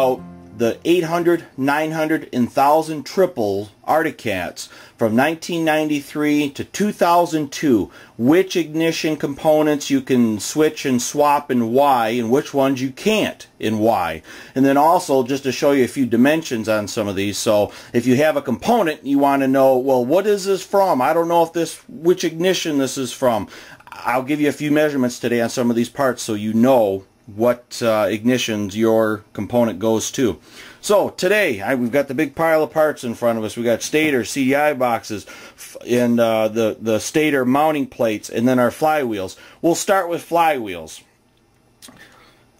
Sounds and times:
Speech: 0.0 - 41.1.

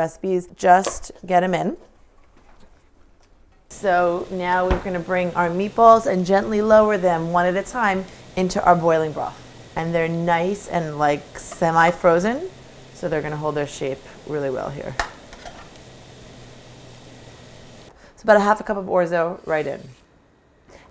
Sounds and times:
Speech: 18.2 - 20.0.

